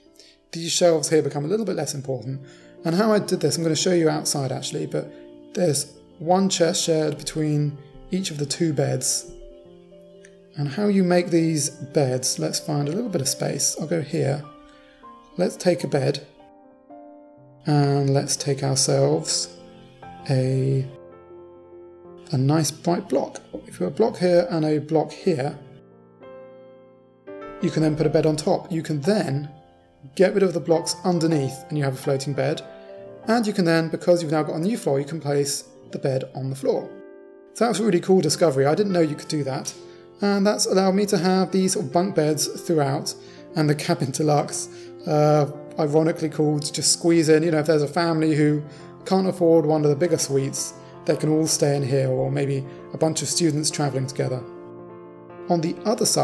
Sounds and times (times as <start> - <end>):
Music: 0.0 - 56.2
Speech: 0.5 - 9.3, 10.6 - 14.5, 15.4 - 16.3, 17.6 - 19.6, 20.2 - 21.0, 22.3 - 25.7, 27.6 - 29.5, 30.1 - 32.6, 33.3 - 37.0, 37.6 - 54.5, 55.5 - 56.2.